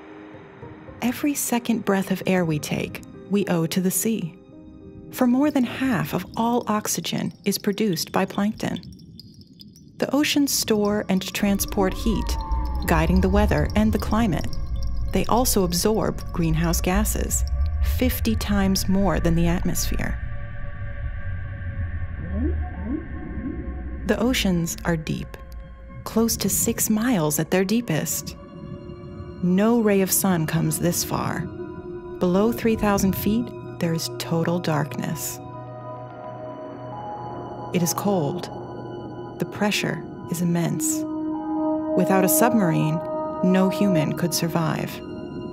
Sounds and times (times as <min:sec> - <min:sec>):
Music: 0:00.0 - 0:45.5
Speech: 0:01.0 - 0:04.4, 0:05.2 - 0:08.8, 0:10.0 - 0:14.5, 0:15.2 - 0:20.2, 0:24.1 - 0:25.4, 0:26.1 - 0:28.4, 0:29.4 - 0:31.5, 0:32.2 - 0:35.4, 0:37.8 - 0:38.5, 0:39.4 - 0:41.0, 0:42.0 - 0:45.0
Whale vocalization: 0:11.6 - 0:13.4, 0:21.6 - 0:24.0.